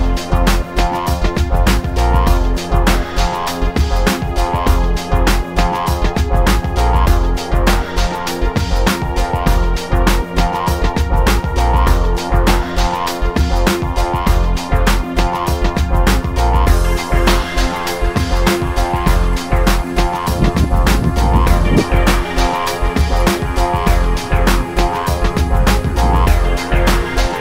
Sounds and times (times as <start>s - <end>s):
Music: 0.0s - 27.4s.